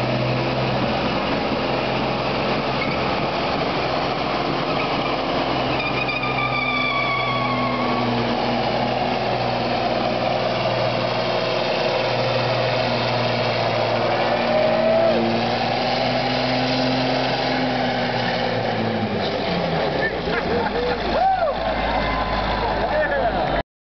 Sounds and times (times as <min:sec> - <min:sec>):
Truck: 0:00.0 - 0:23.6
Speech: 0:22.6 - 0:23.6.